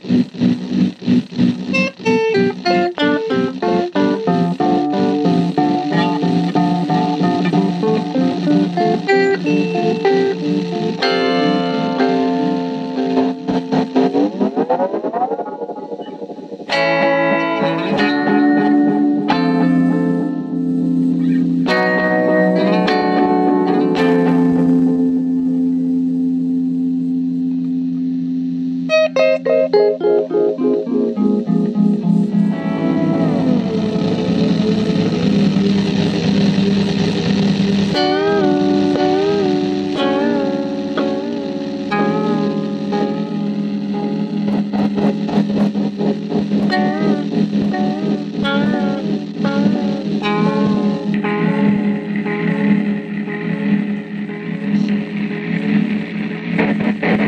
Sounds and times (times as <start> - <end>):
Blues: 0.0 - 57.2
Effects unit: 0.0 - 57.2
Guitar: 0.0 - 57.2
Synthesizer: 0.0 - 57.2.